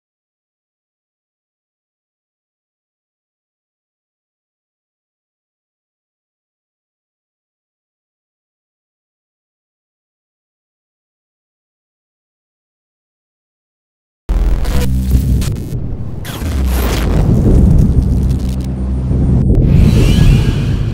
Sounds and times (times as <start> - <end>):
Music: 14.3 - 20.9.